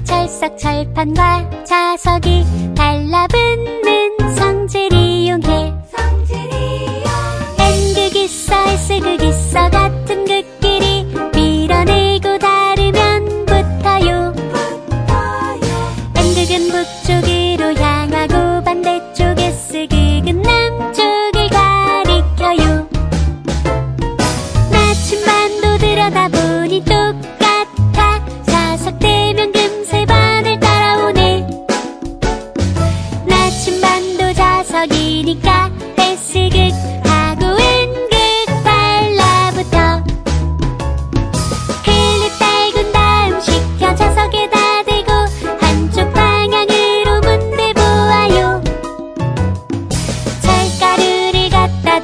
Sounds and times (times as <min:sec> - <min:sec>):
Music for children: 0:00.0 - 0:52.0.